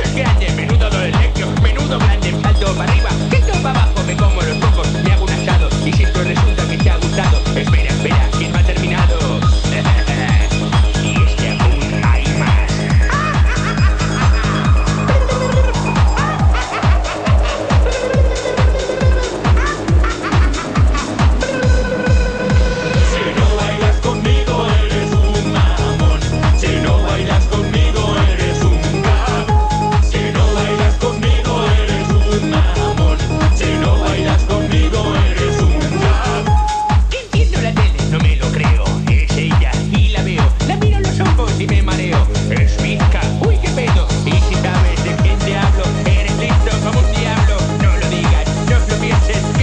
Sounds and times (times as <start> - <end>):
Funk: 0.0 - 49.6
Pop music: 0.0 - 49.6.